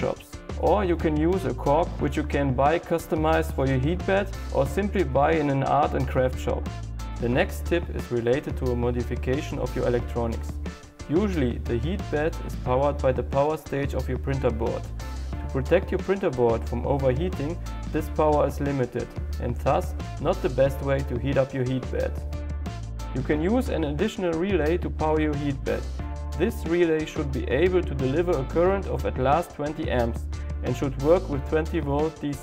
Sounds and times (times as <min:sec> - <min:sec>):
Speech: 0:00.0 - 0:14.9, 0:15.5 - 0:22.2, 0:23.1 - 0:32.4
Music: 0:00.0 - 0:32.4.